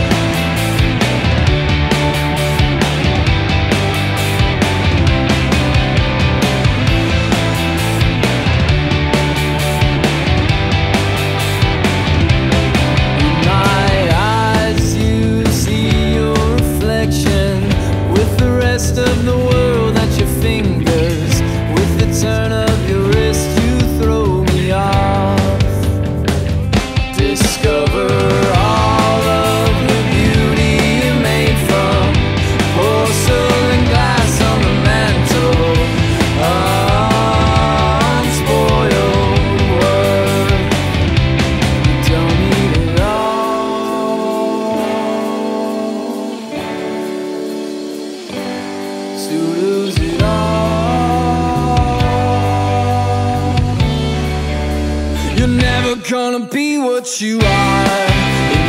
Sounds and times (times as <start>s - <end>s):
Grunge: 0.0s - 58.6s.